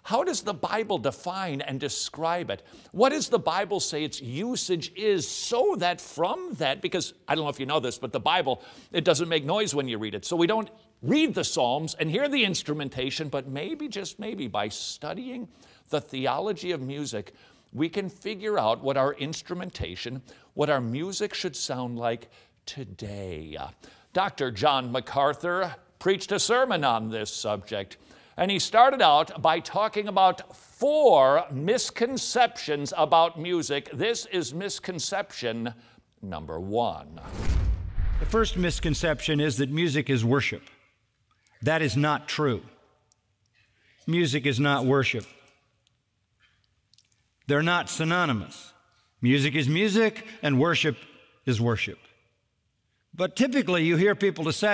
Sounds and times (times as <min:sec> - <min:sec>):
Speech: 0:00.1 - 0:37.3, 0:38.3 - 0:40.8, 0:41.6 - 0:42.8, 0:44.1 - 0:45.4, 0:47.5 - 0:52.1, 0:53.2 - 0:54.7.